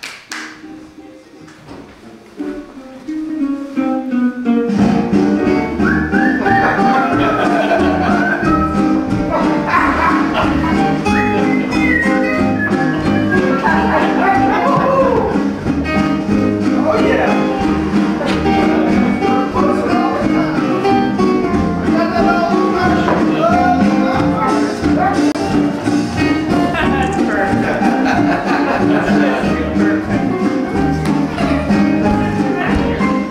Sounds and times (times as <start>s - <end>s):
Music: 0.0s - 33.3s.